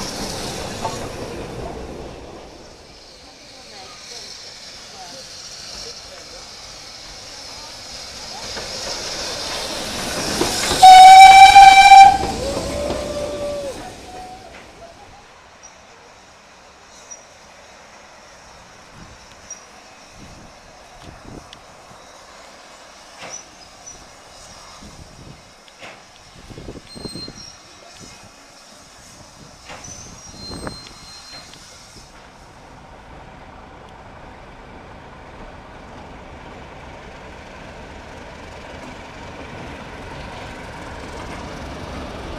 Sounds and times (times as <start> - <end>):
Railroad car, train wagon: 0.0 - 42.3
Train horn: 10.8 - 14.5.